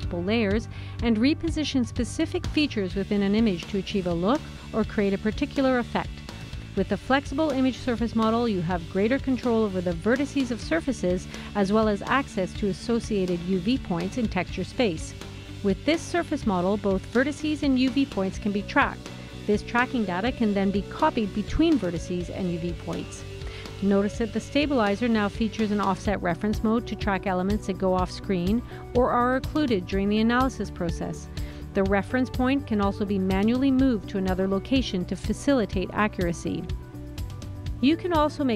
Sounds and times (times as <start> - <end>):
Speech: 0.0 - 6.1, 6.8 - 23.2, 23.8 - 36.7, 37.8 - 38.5
Music: 0.0 - 38.5.